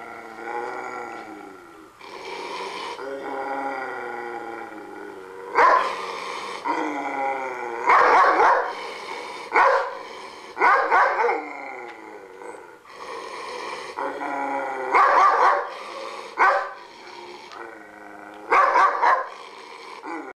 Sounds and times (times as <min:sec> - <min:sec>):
Yip: 0:15.0 - 0:15.7.